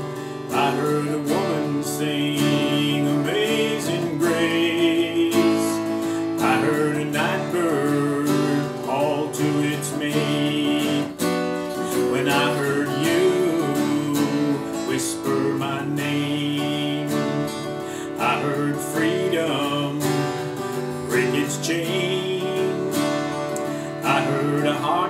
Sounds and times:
Acoustic guitar: 0:00.0 - 0:25.1
Strum: 0:00.0 - 0:25.1.

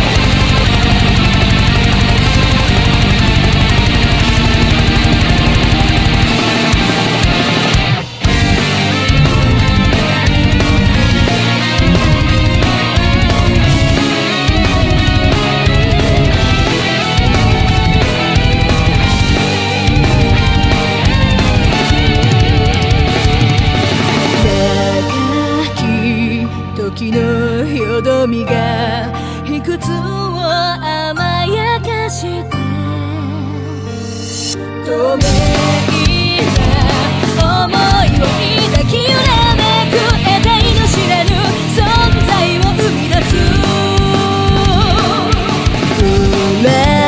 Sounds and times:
Music: 0:00.0 - 0:47.0.

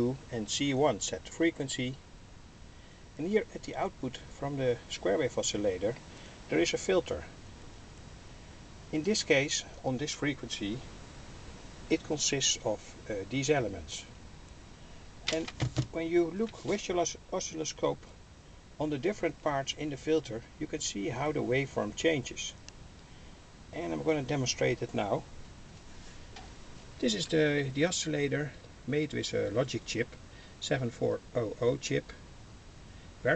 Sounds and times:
Speech: 0:00.0 - 0:02.0, 0:03.2 - 0:07.4, 0:08.9 - 0:10.9, 0:11.9 - 0:14.1, 0:15.3 - 0:18.1, 0:18.8 - 0:22.6, 0:23.7 - 0:25.3, 0:27.0 - 0:32.2.

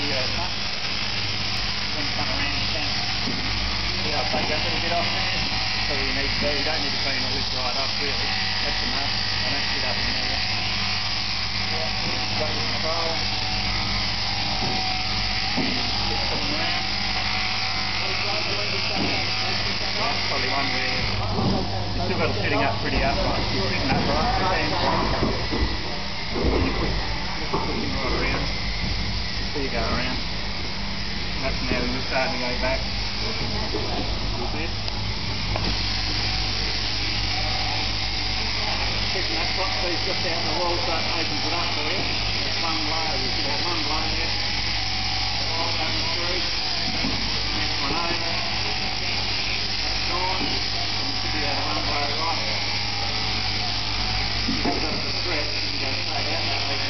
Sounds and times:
Speech: 0:00.0 - 0:00.6, 0:01.9 - 0:10.7, 0:11.6 - 0:13.4, 0:15.7 - 0:16.9, 0:17.9 - 0:26.1, 0:26.7 - 0:28.6, 0:29.5 - 0:30.2, 0:31.4 - 0:34.8, 0:36.9 - 0:44.4, 0:45.4 - 0:53.9, 0:54.5 - 0:56.9
Electric shaver, electric razor: 0:00.0 - 0:56.9.

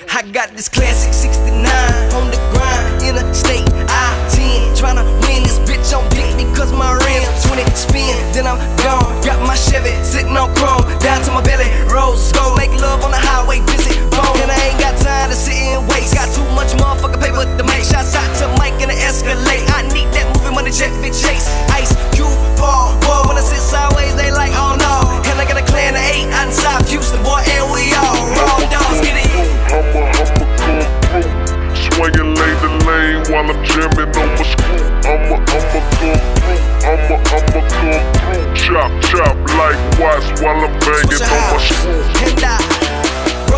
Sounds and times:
Funk: 0:00.1 - 0:43.5.

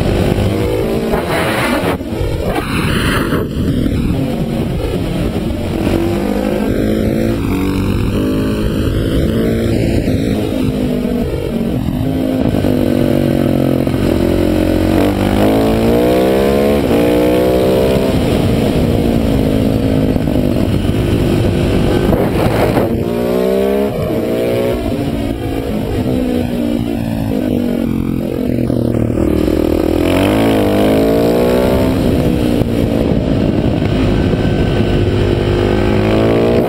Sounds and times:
Motorcycle: 0:00.0 - 0:36.6.

